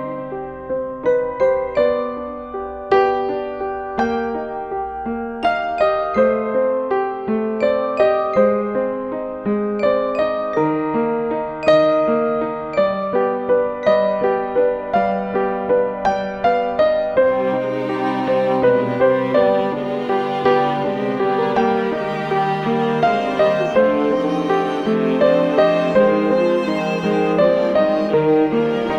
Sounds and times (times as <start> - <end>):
Lullaby: 5.3 - 15.4, 17.3 - 28.9.